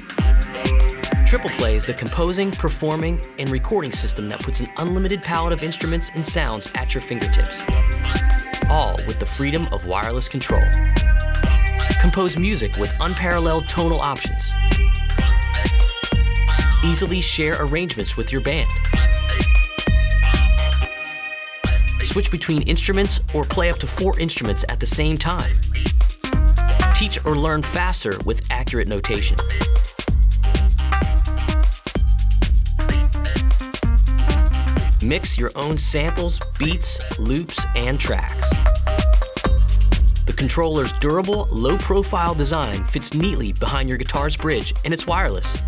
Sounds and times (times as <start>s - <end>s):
Speech: 1.3s - 7.7s, 8.6s - 10.8s, 12.0s - 14.6s, 16.8s - 18.8s, 22.0s - 25.6s, 26.9s - 29.4s, 35.0s - 38.6s, 40.3s - 45.6s.